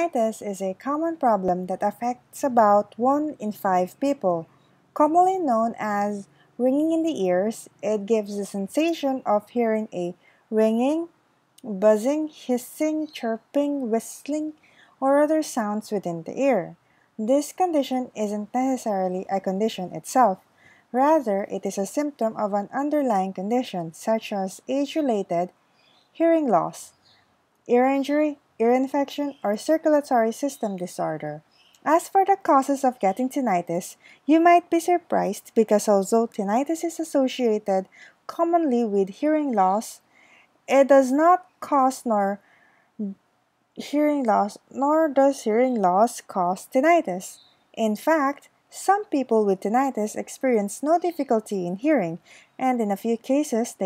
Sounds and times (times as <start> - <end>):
Speech: 0.0 - 20.4, 21.0 - 25.5, 26.2 - 27.0, 27.7 - 40.0, 40.7 - 42.4, 43.0 - 43.2, 43.8 - 53.8.